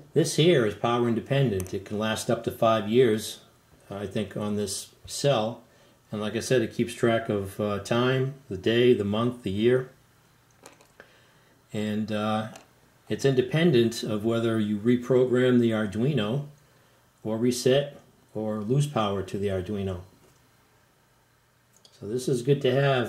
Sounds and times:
Speech: 0:00.0 - 0:10.0, 0:11.7 - 0:16.6, 0:17.2 - 0:20.2, 0:21.9 - 0:23.0
Inside, small room: 0:00.0 - 0:23.0.

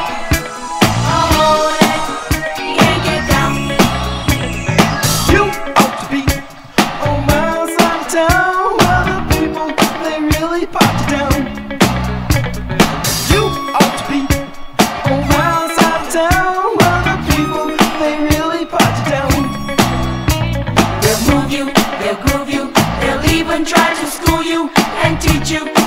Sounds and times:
Funk: 0:00.0 - 0:25.8.

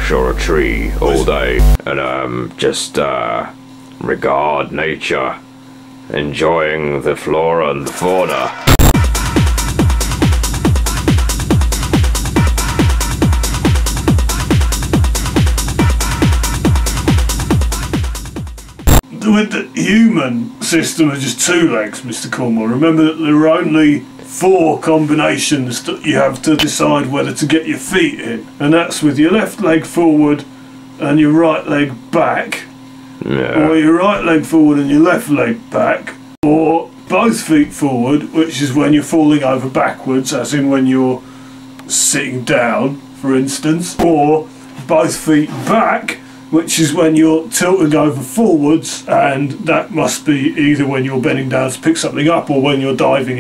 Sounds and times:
Speech: 0:00.0 - 0:05.5, 0:06.1 - 0:08.6, 0:19.0 - 0:41.2, 0:41.8 - 0:53.4
Techno: 0:00.9 - 0:01.8, 0:08.1 - 0:19.0.

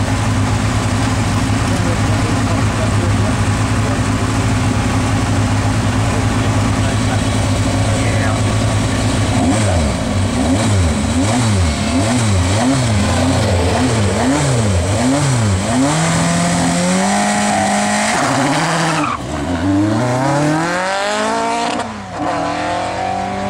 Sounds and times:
Car: 0:00.0 - 0:23.5.

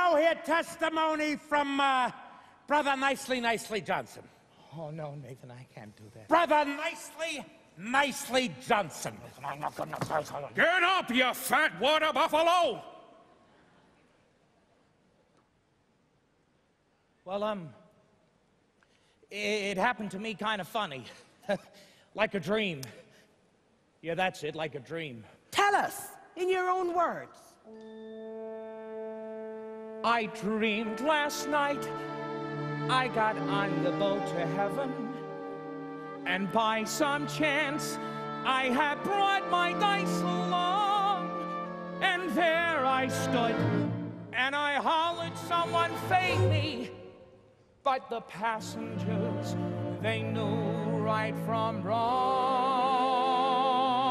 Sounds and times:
Speech: 0:02.7 - 0:12.8, 0:17.3 - 0:17.8, 0:19.3 - 0:23.0, 0:24.0 - 0:27.5
Music: 0:26.9 - 0:47.3, 0:48.1 - 0:54.1.

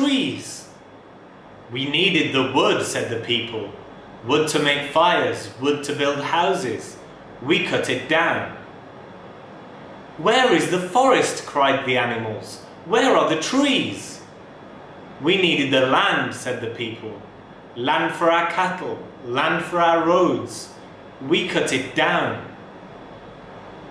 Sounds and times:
Male speech, man speaking: 0:00.0 - 0:00.8, 0:01.7 - 0:08.6, 0:10.2 - 0:14.3, 0:15.2 - 0:22.6
Narration, monologue: 0:00.0 - 0:23.9.

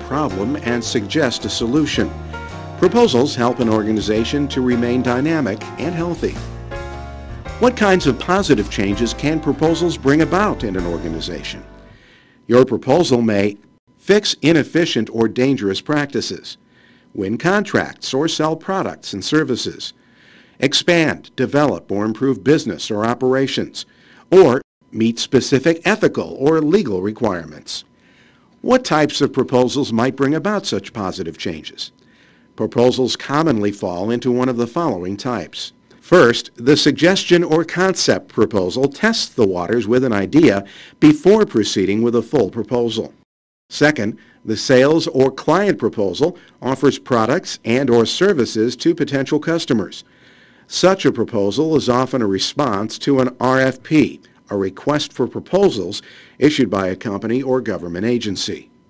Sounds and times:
Speech: 0:00.0 - 0:02.1, 0:02.8 - 0:06.4, 0:07.6 - 0:11.6, 0:12.5 - 0:16.6, 0:17.2 - 0:20.0, 0:20.6 - 0:27.9, 0:28.6 - 0:32.0, 0:32.6 - 0:50.0, 0:50.7 - 0:58.7.

